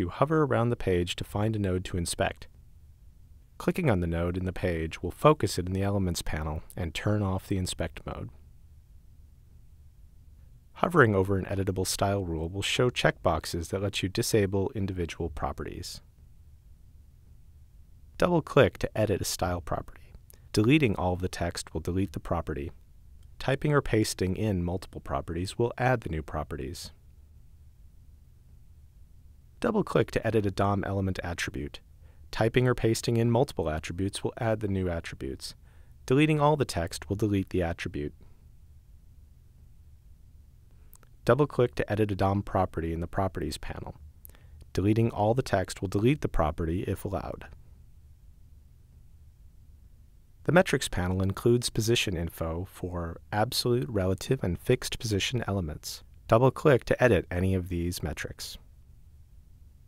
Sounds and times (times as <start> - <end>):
Speech: 0.0 - 2.5, 3.6 - 8.4, 10.8 - 16.1, 18.2 - 22.8, 23.4 - 27.0, 29.6 - 38.2, 41.2 - 44.0, 44.7 - 47.6, 50.5 - 58.6.